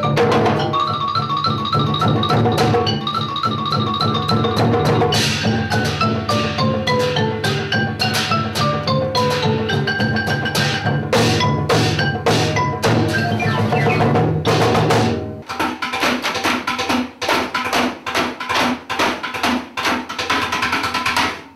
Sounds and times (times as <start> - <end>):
Glockenspiel: 0.0 - 14.2
Marimba, xylophone: 0.0 - 16.4.